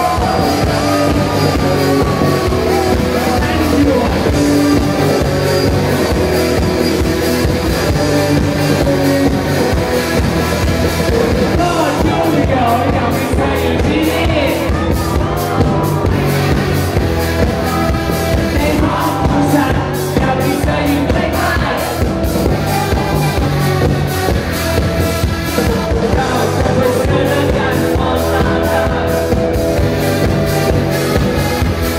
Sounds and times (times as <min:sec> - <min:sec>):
Music: 0:00.0 - 0:31.9.